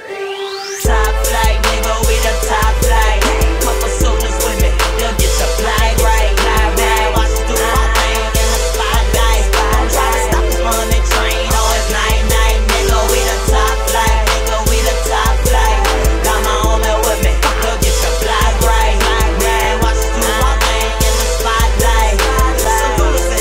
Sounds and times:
Exciting music: 0:00.0 - 0:23.4.

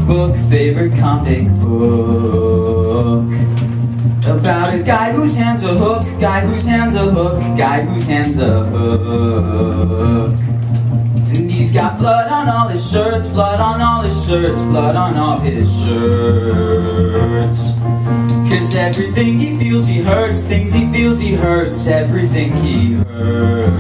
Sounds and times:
Rock and roll: 0:00.0 - 0:23.8.

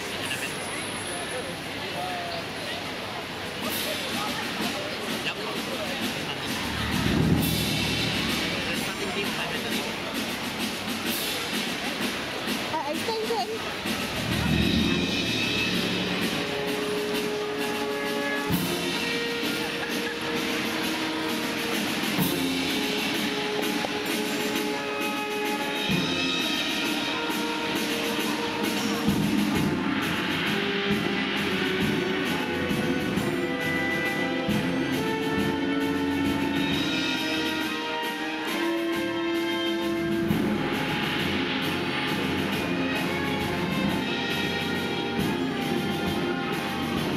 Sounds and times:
Speech: 0:00.0 - 0:16.1
Music: 0:00.0 - 0:47.1.

